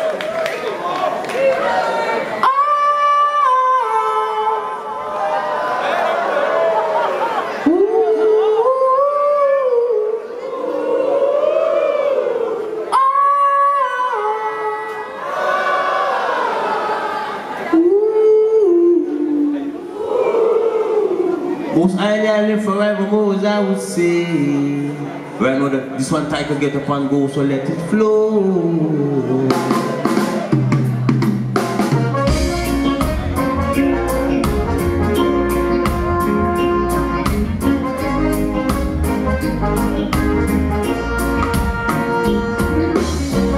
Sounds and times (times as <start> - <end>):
Music: 29.3 - 43.5.